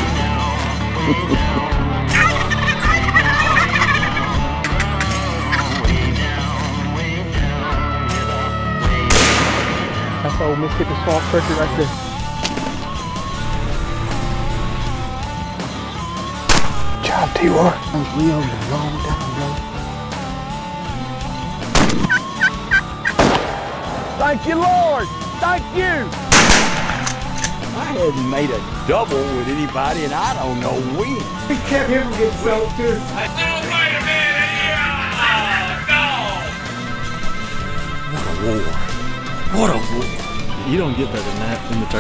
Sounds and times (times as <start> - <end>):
Music: 0.0 - 42.0.